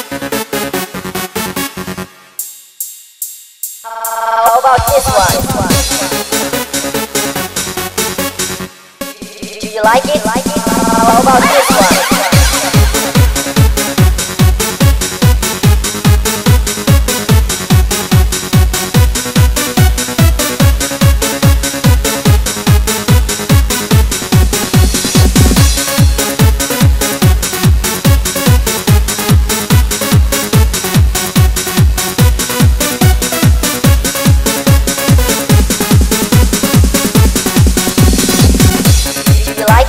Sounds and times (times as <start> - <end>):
Background music: 0.0 - 2.4, 3.9 - 39.8.